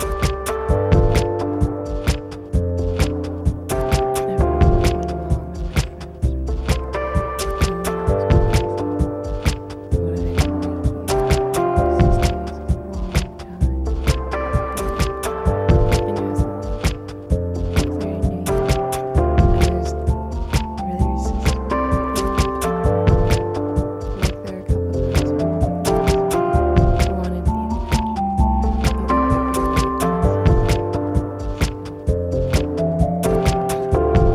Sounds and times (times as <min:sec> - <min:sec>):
Music: 0:00.0 - 0:34.3.